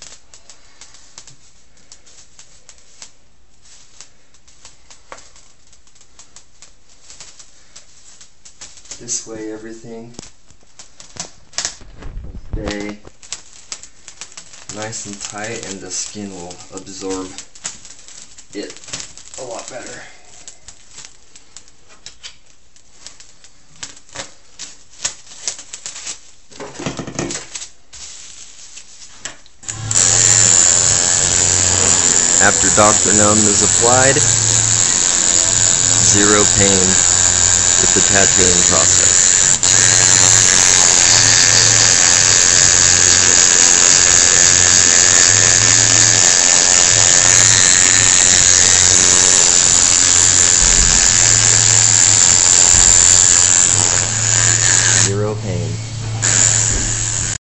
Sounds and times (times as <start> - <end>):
Speech: 9.0 - 10.2, 12.6 - 13.1, 14.7 - 17.4, 18.5 - 18.8, 19.4 - 20.1, 31.6 - 34.3, 36.0 - 37.0, 37.8 - 38.9, 55.0 - 55.8
Electric toothbrush: 29.6 - 57.4.